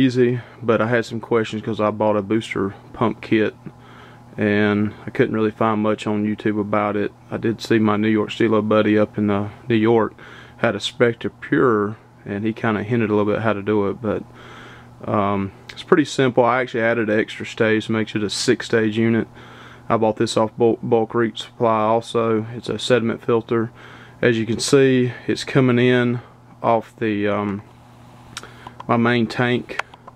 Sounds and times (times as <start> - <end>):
Speech: 0.0 - 3.7, 4.4 - 14.3, 15.0 - 19.3, 19.9 - 27.7, 28.9 - 29.8.